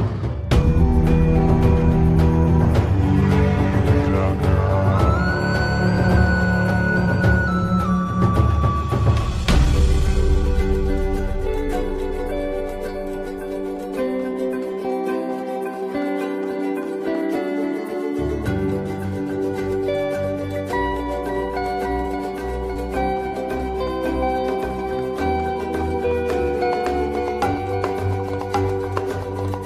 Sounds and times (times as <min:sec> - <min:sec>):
Music: 0:00.0 - 0:29.6.